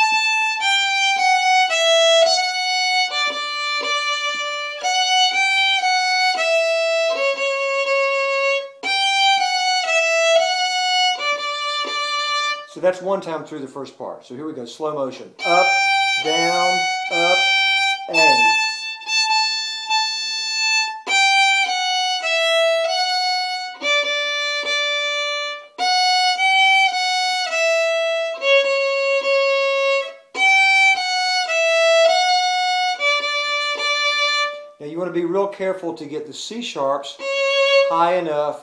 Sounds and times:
Violin, fiddle: 0:00.0 - 0:13.2, 0:15.4 - 0:38.6
Speech: 0:12.7 - 0:17.5, 0:18.1 - 0:18.6, 0:34.8 - 0:37.2, 0:37.9 - 0:38.6.

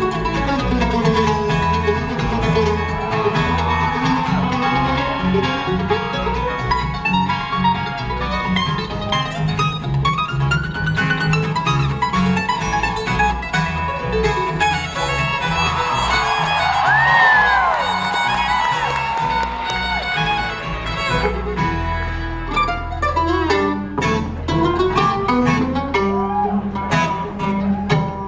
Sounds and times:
Bluegrass: 0:00.0 - 0:28.2.

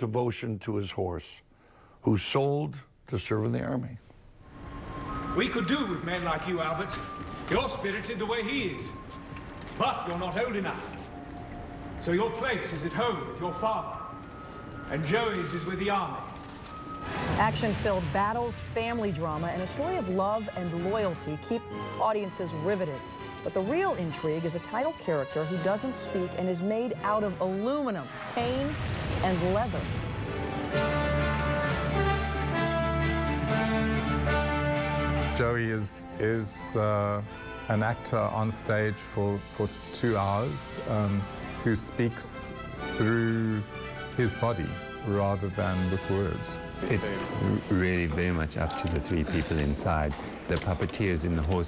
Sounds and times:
Music: 0:04.4 - 0:51.6.

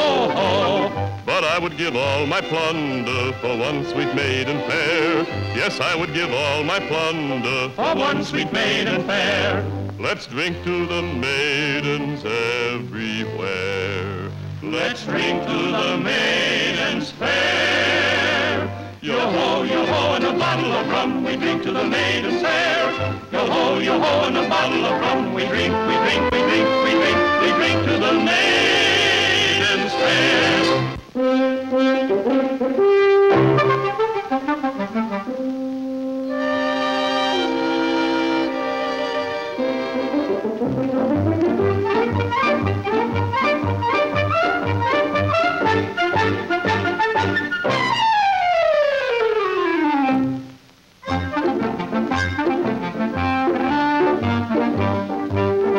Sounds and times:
Music: 0:00.0 - 0:55.7.

